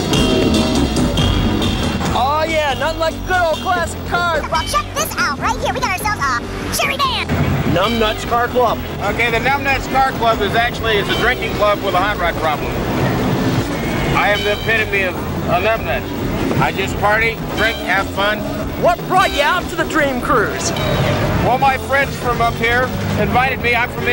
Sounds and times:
Music: 0:00.0 - 0:24.1.

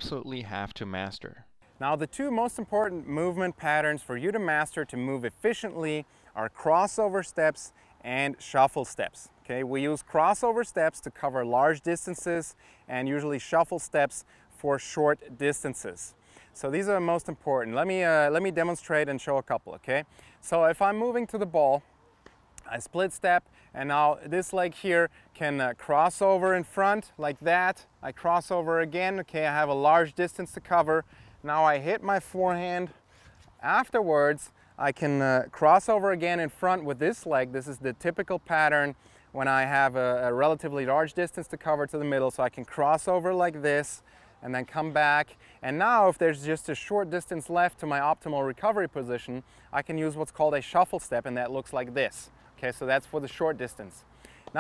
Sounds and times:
Speech: 0:00.0 - 0:21.8, 0:22.6 - 0:33.0, 0:33.6 - 0:54.6.

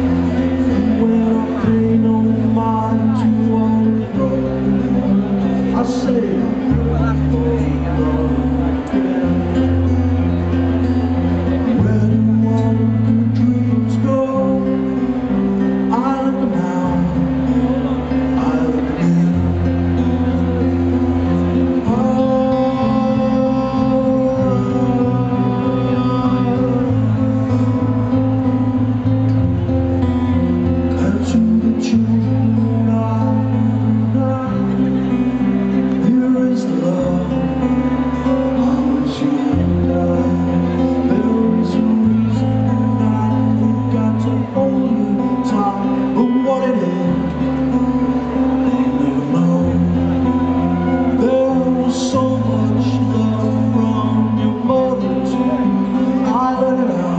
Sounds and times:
Speech: 0:00.0 - 0:28.4, 0:30.9 - 0:57.1
Music: 0:00.0 - 0:57.1.

